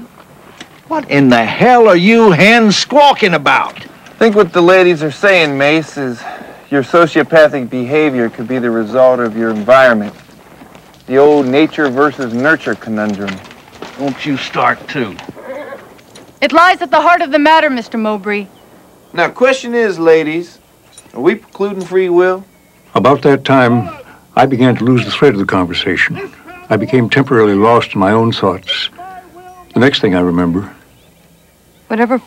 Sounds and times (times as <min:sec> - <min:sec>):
Narration, monologue: 0:00.0 - 0:32.2
Male speech, man speaking: 0:00.9 - 0:10.2, 0:11.1 - 0:15.3, 0:19.1 - 0:30.8.